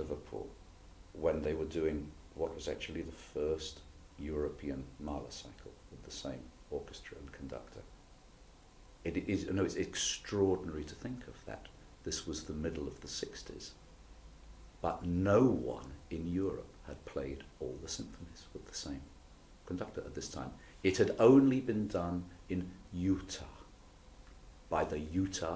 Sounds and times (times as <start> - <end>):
Speech: 0.0 - 0.6, 1.2 - 7.9, 9.0 - 13.8, 14.8 - 23.7, 24.7 - 25.5.